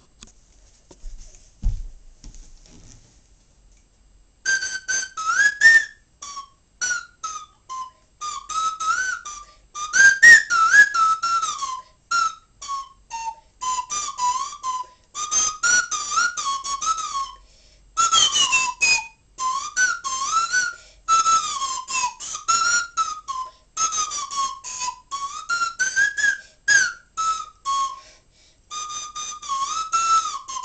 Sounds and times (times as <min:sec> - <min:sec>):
Whistle: 0:04.4 - 0:30.6.